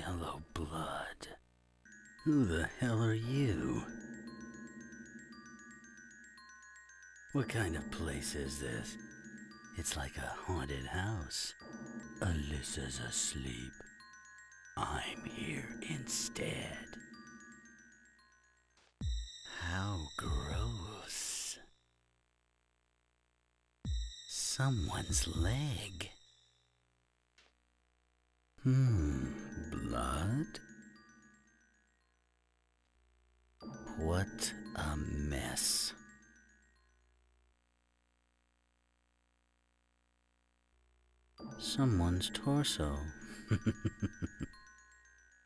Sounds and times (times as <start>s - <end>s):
Speech: 0.0s - 1.4s, 2.3s - 3.9s, 7.4s - 9.0s, 9.8s - 11.6s, 12.2s - 13.8s, 14.8s - 17.0s, 19.5s - 21.7s, 24.3s - 26.2s, 28.6s - 30.6s, 33.9s - 36.0s, 41.6s - 43.1s
Music: 0.0s - 22.0s, 23.9s - 26.9s, 28.6s - 32.7s, 33.6s - 37.3s, 41.4s - 45.4s.